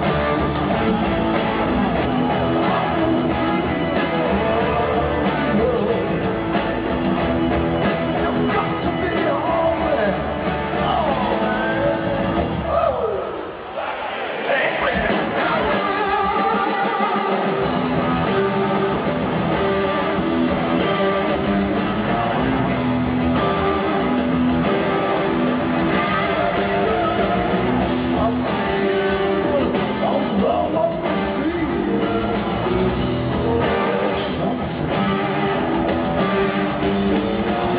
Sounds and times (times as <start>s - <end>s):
Rock and roll: 0.0s - 37.7s.